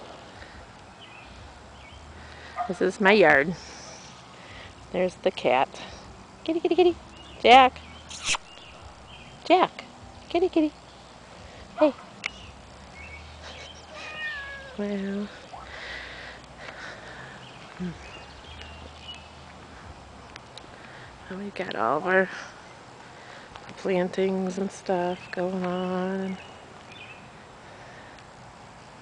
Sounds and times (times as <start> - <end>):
Outside, rural or natural: 0.0 - 29.0.